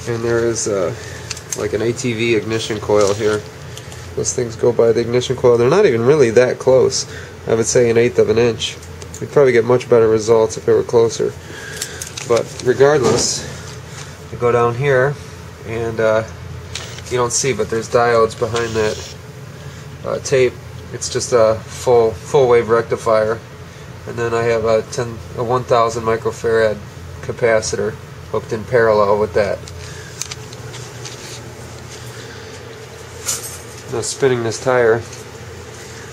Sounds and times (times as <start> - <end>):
Speech: 0.0 - 3.5, 4.2 - 11.4, 12.3 - 13.6, 14.3 - 16.4, 17.0 - 19.2, 20.0 - 23.5, 24.1 - 29.6, 33.9 - 35.1.